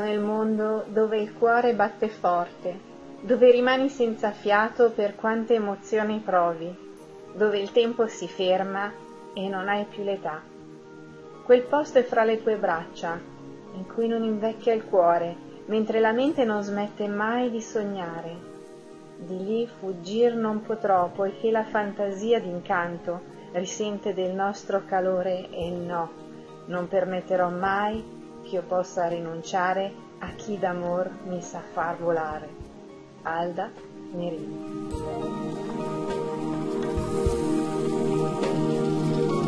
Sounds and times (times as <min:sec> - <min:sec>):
Speech: 0:00.0 - 0:06.8, 0:07.4 - 0:10.4, 0:11.5 - 0:13.2, 0:13.8 - 0:18.4, 0:19.2 - 0:26.1, 0:26.7 - 0:32.5, 0:33.3 - 0:34.5
Music: 0:00.0 - 0:39.4.